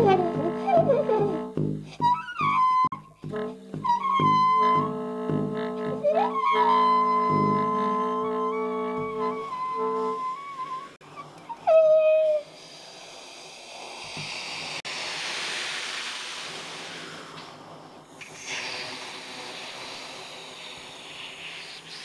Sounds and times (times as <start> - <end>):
Wind instrument, woodwind instrument: 0.0 - 12.5.